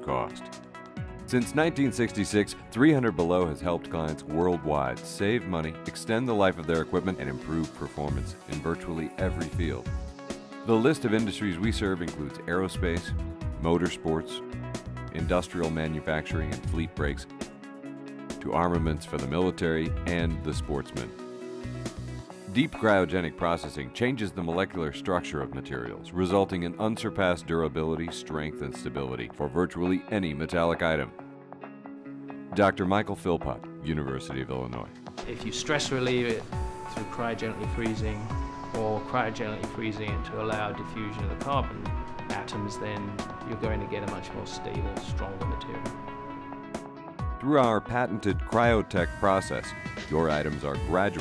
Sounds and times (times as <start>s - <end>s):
Speech: 0.0s - 0.5s, 1.3s - 9.9s, 10.7s - 14.4s, 15.1s - 17.3s, 18.4s - 21.1s, 22.5s - 31.1s, 32.5s - 45.9s, 47.4s - 51.2s
Music: 0.0s - 51.2s.